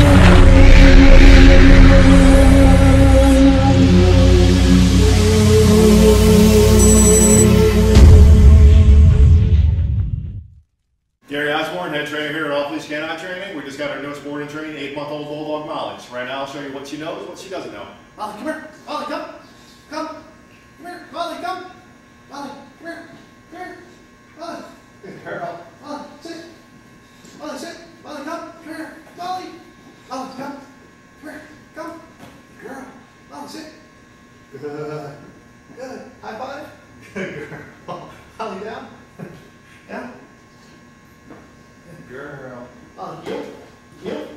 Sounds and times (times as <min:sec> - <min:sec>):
Speech: 0:11.3 - 0:26.6, 0:27.4 - 0:33.9, 0:34.5 - 0:39.0, 0:41.9 - 0:44.3.